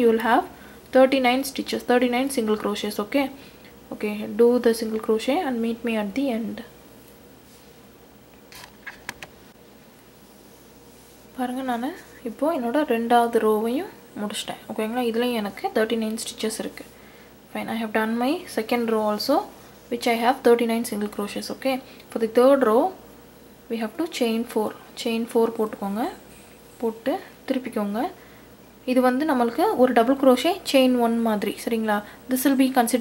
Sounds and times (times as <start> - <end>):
Speech: 0.0 - 6.7, 11.4 - 16.9, 17.5 - 23.0, 23.7 - 26.2, 26.8 - 28.2, 28.9 - 33.0
Inside, small room: 0.0 - 33.0.